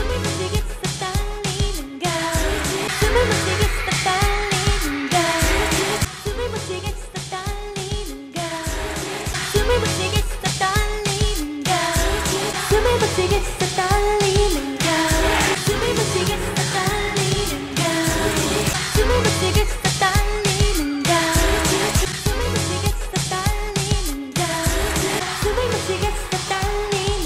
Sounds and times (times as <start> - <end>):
Pop music: 0.0 - 27.2
Singing: 0.0 - 27.2.